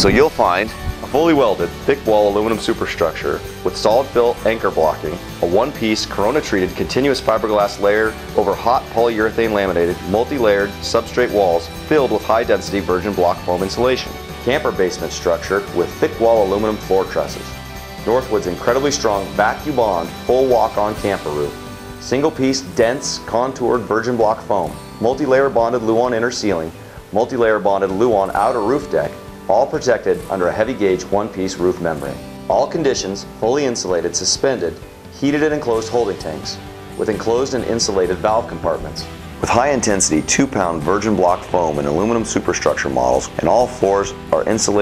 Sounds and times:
Music: 0.0s - 44.8s
Speech: 0.0s - 44.8s.

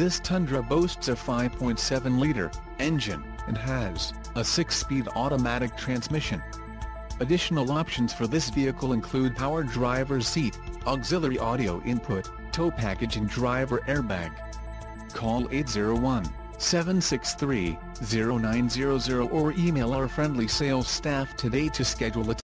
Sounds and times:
Speech: 0.0s - 6.5s, 7.2s - 14.4s, 15.2s - 22.4s
Music: 0.0s - 22.4s.

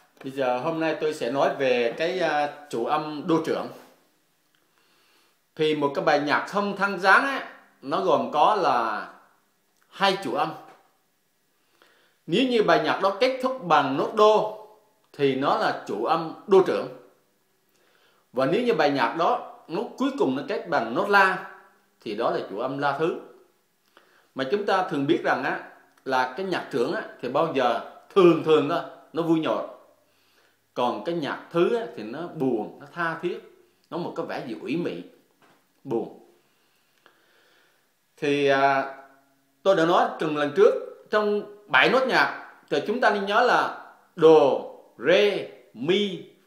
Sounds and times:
Speech: 0.2s - 3.9s, 5.6s - 9.2s, 9.9s - 10.7s, 12.3s - 17.1s, 18.4s - 23.3s, 24.4s - 29.8s, 30.8s - 35.2s, 35.8s - 36.3s, 38.2s - 39.0s, 39.6s - 46.3s.

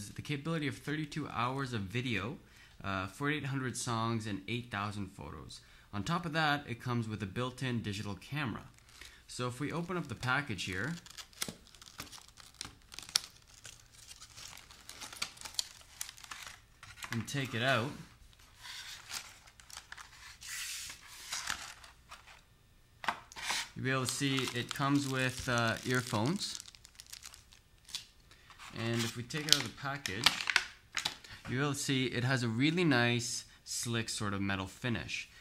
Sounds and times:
Speech: 0.0s - 11.0s, 17.1s - 18.1s, 23.8s - 26.6s, 28.7s - 30.4s, 31.5s - 35.3s
Inside, small room: 0.0s - 35.4s.

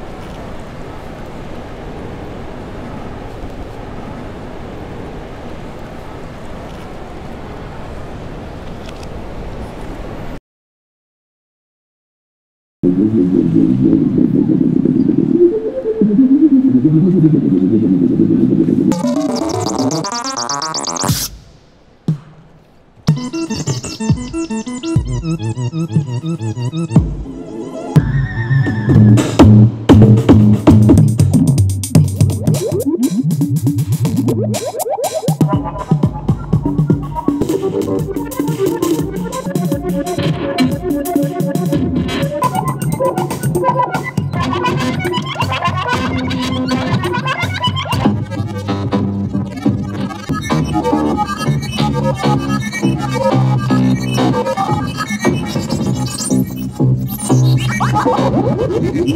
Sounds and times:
Sampler: 12.8s - 21.6s, 23.1s - 28.2s, 29.0s - 59.1s.

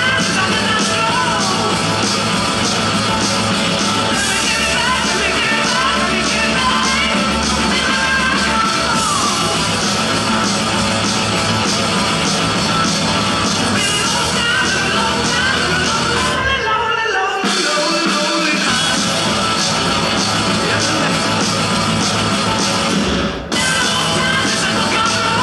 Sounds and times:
Rock and roll: 0.0s - 25.4s.

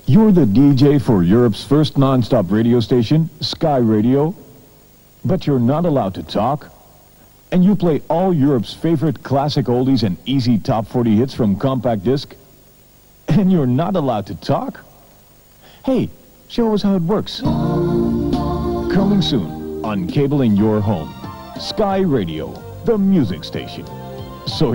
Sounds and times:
Speech: 0.1s - 4.4s, 5.2s - 6.8s, 7.5s - 12.4s, 13.3s - 15.0s, 15.8s - 17.5s, 18.9s - 23.9s, 24.5s - 24.7s
Music: 17.4s - 24.7s
Radio: 18.9s - 23.9s.

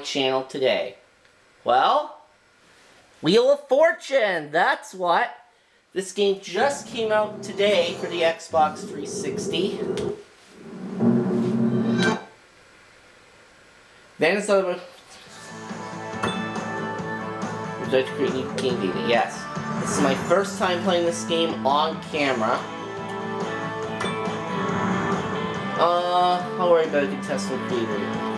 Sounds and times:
Speech: 0.0s - 1.0s, 1.6s - 2.3s, 3.2s - 10.0s, 14.2s - 15.0s, 17.8s - 22.6s, 25.8s - 28.1s
Music: 6.6s - 10.0s, 15.2s - 28.3s.

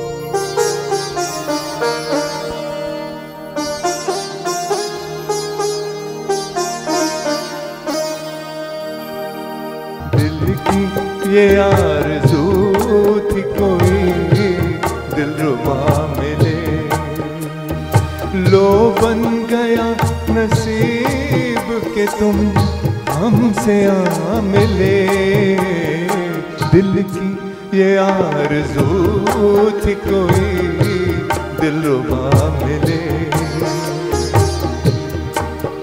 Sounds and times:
Sitar: 0.0s - 35.8s
Singing: 10.0s - 35.1s.

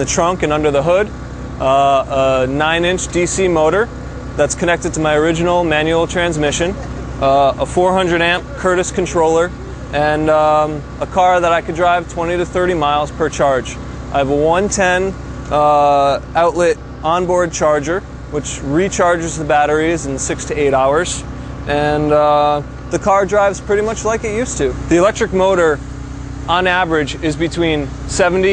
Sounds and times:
Speech: 0.0s - 25.8s, 26.5s - 28.5s
Car: 0.0s - 28.5s.

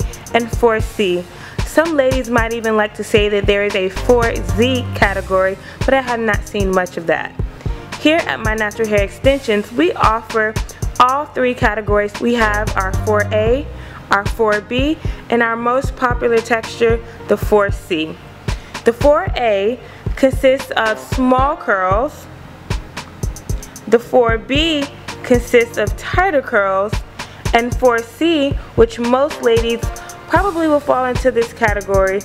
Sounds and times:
Speech: 0.0s - 7.4s, 8.0s - 18.2s, 18.9s - 22.3s, 23.9s - 32.2s
Music: 0.0s - 32.2s.

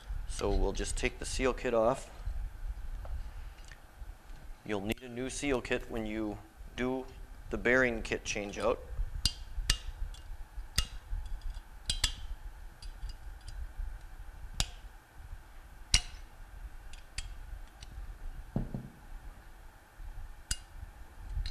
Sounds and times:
Speech: 0.3s - 2.1s, 4.7s - 8.9s.

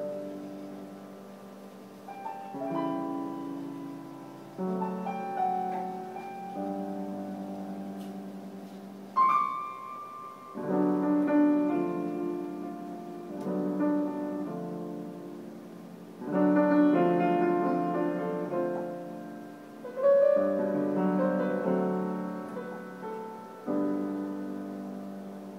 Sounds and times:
Music: 0.0s - 25.5s.

